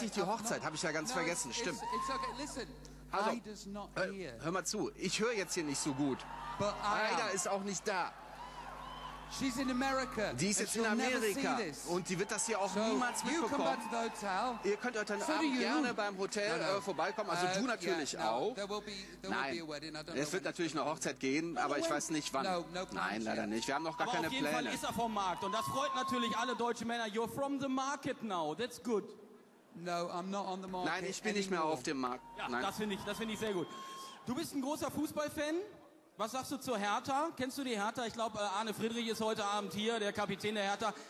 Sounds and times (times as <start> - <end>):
Speech: 9.4 - 29.1, 29.8 - 33.6.